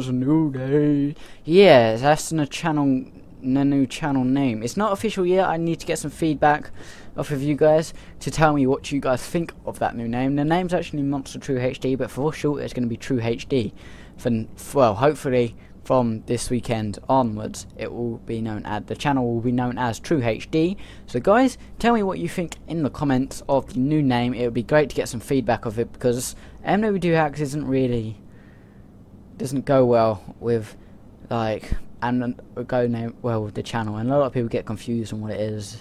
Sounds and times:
Speech: 0.0s - 28.2s, 29.4s - 35.8s.

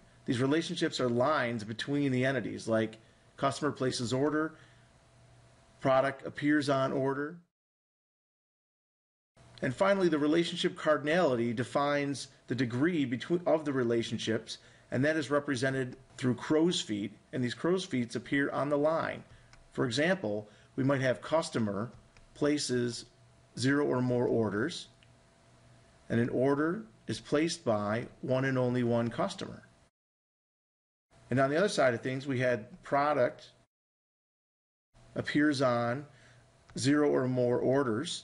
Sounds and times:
Speech: 0.3s - 4.6s, 5.8s - 7.5s, 9.6s - 25.0s, 26.1s - 29.8s, 31.3s - 33.6s, 35.2s - 38.2s.

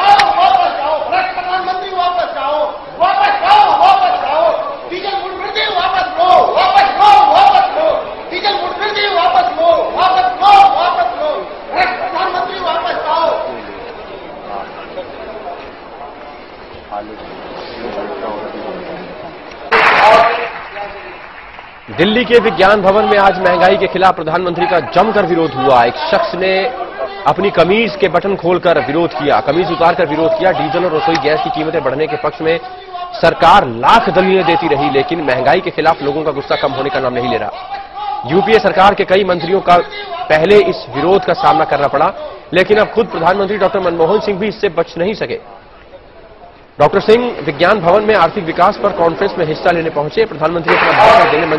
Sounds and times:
Male speech, man speaking: 0.0s - 13.8s, 16.9s - 19.0s, 19.7s - 21.2s, 21.9s - 45.5s, 46.8s - 51.5s
Narration, monologue: 0.0s - 51.5s.

